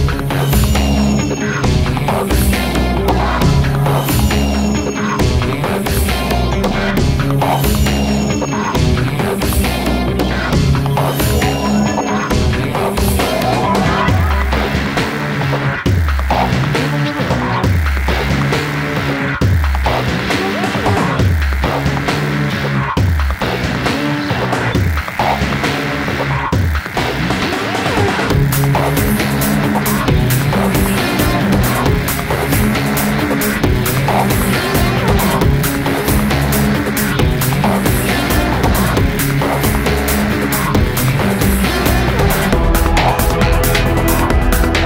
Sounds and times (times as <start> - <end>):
Music: 0.0 - 44.8.